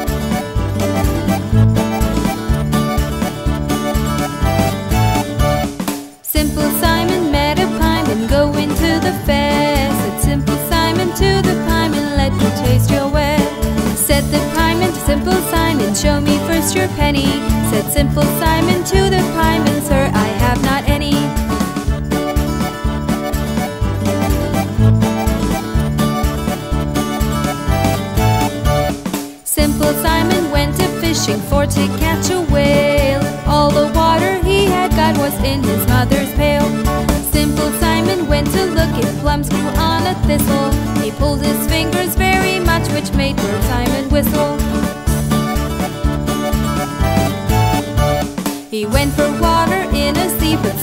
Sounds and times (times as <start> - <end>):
Music: 0.0 - 50.8.